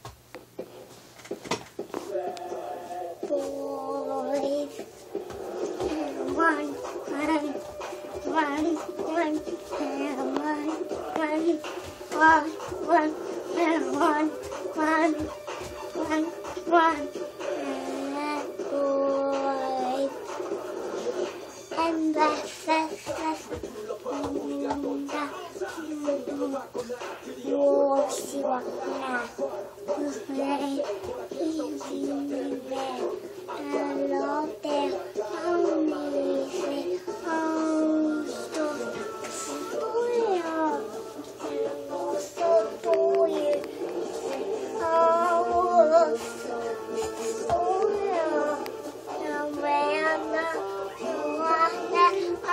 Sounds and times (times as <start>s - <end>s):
Music: 1.8s - 52.5s.